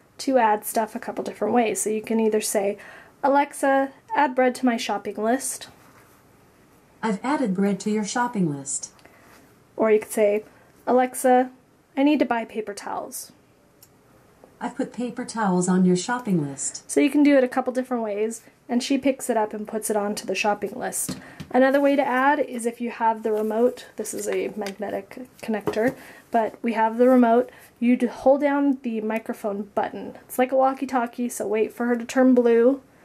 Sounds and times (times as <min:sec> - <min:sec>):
Speech: 0:00.2 - 0:05.8, 0:07.0 - 0:09.0, 0:09.8 - 0:13.4, 0:14.6 - 0:32.8.